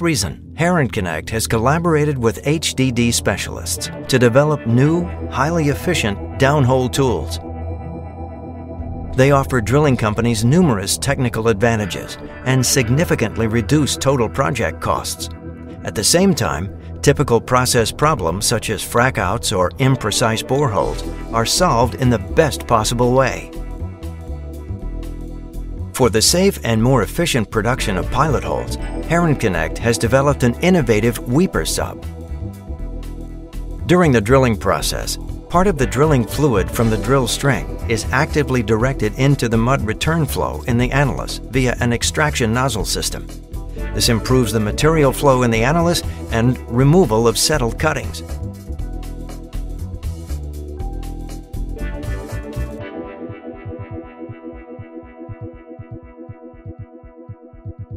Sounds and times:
Speech: 0:00.0 - 0:07.4, 0:09.2 - 0:23.6, 0:26.0 - 0:32.0, 0:33.8 - 0:43.2, 0:43.9 - 0:48.3
Music: 0:00.0 - 0:57.9.

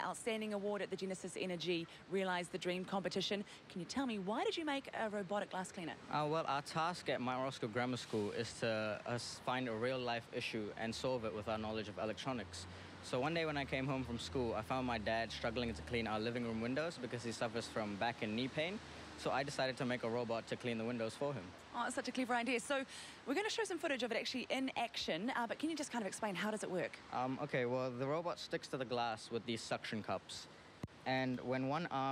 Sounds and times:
Speech: 0:00.0 - 0:30.5, 0:31.1 - 0:32.1.

